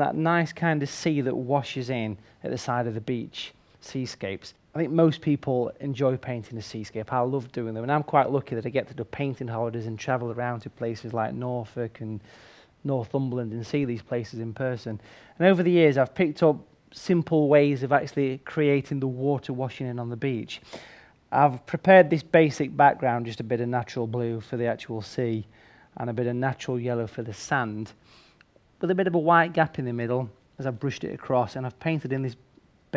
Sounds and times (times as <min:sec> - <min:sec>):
Speech: 0:00.0 - 0:20.7, 0:21.3 - 0:28.0, 0:28.8 - 0:32.9.